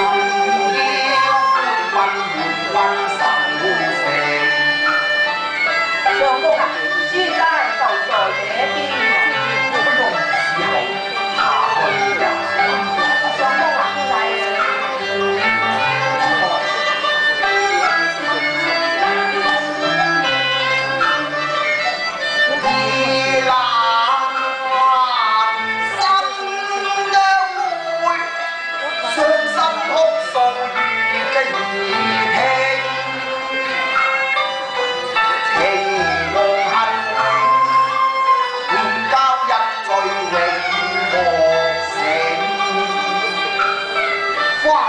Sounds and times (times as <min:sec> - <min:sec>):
Music: 0:00.0 - 0:44.8.